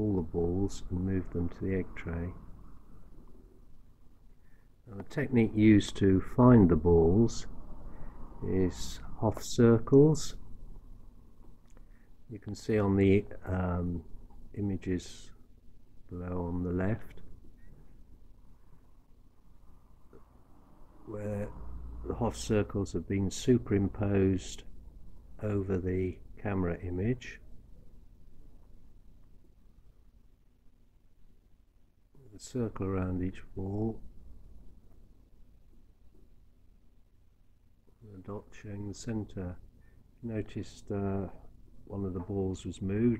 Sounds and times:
Speech: 0.0s - 2.5s, 4.9s - 7.5s, 8.4s - 10.4s, 12.3s - 15.4s, 16.1s - 17.3s, 21.0s - 24.7s, 25.4s - 27.5s, 32.2s - 34.1s, 38.0s - 39.6s, 40.2s - 43.1s
Silence: 0.0s - 12.4s, 15.2s - 42.4s.

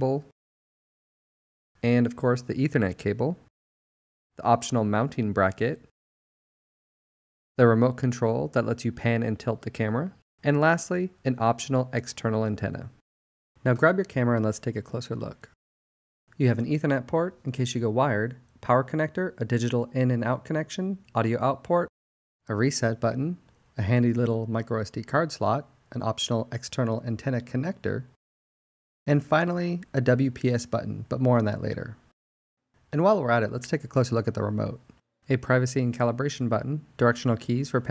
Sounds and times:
Speech: 0.0s - 0.3s, 1.8s - 3.5s, 4.4s - 5.9s, 7.6s - 13.0s, 13.6s - 15.6s, 16.4s - 21.9s, 22.5s - 28.2s, 29.1s - 32.1s, 32.9s - 37.9s.

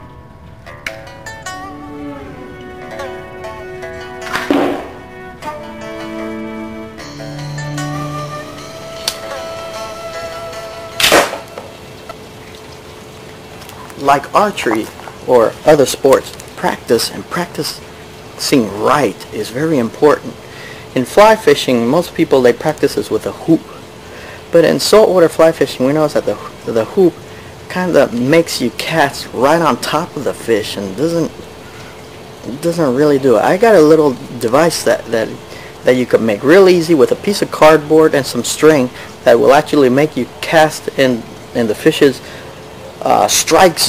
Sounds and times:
Speech: 14.0s - 17.8s, 18.4s - 20.4s, 21.0s - 23.8s, 24.5s - 31.4s, 32.4s - 42.2s, 43.0s - 43.8s.

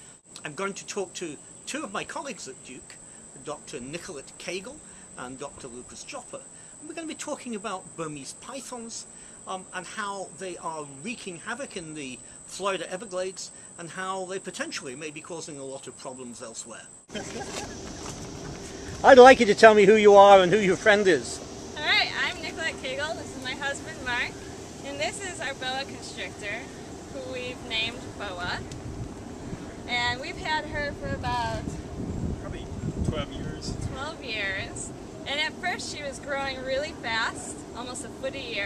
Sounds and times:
Outside, rural or natural: 0.0s - 38.6s
Speech: 0.4s - 2.9s, 19.0s - 24.3s, 24.9s - 26.6s, 27.2s - 28.6s, 29.9s - 31.7s, 32.4s - 38.6s.

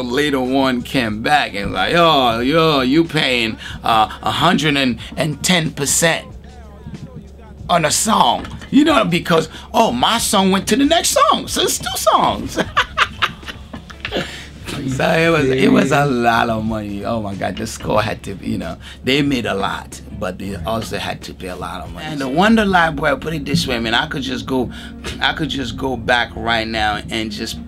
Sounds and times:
Speech: 0.0s - 12.7s, 14.6s - 27.6s
Music: 0.0s - 27.6s.

